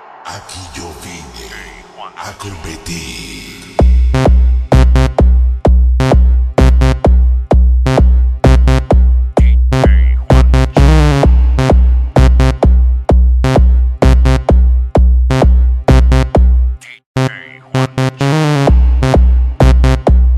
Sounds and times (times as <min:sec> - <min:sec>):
Music: 0:02.8 - 0:20.3.